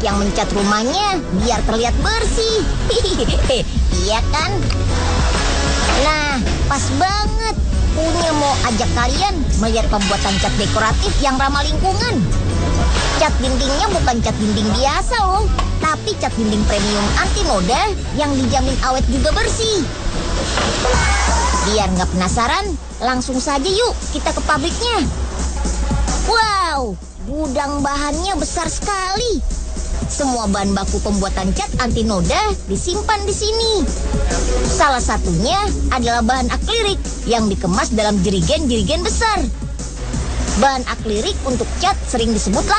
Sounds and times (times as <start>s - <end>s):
Speech: 0.0s - 4.7s, 5.9s - 12.3s, 13.2s - 19.9s, 21.6s - 25.1s, 26.3s - 29.4s, 30.1s - 33.9s, 34.8s - 39.6s, 40.6s - 42.7s
Music: 0.0s - 42.7s.